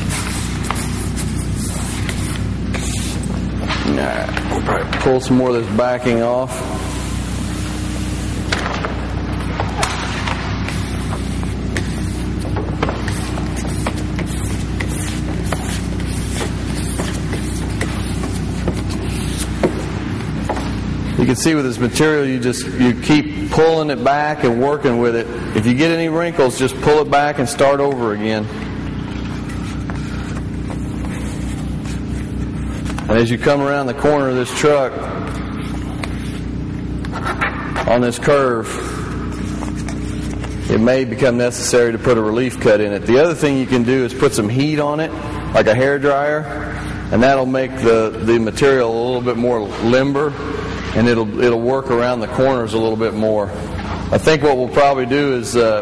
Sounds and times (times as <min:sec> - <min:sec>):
Inside, large room or hall: 0:00.0 - 0:55.8
Speech: 0:03.8 - 0:06.6, 0:21.2 - 0:28.5, 0:33.1 - 0:35.0, 0:37.8 - 0:38.8, 0:40.7 - 0:50.4, 0:51.0 - 0:55.8.